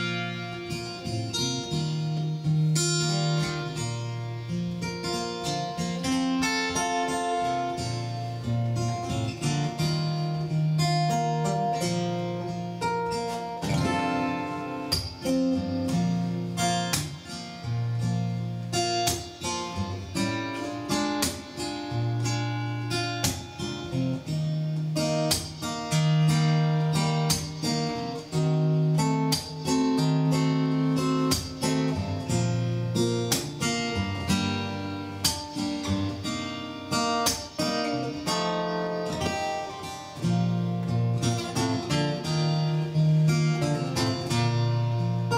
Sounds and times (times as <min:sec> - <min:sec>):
Strum: 0:00.0 - 0:45.3.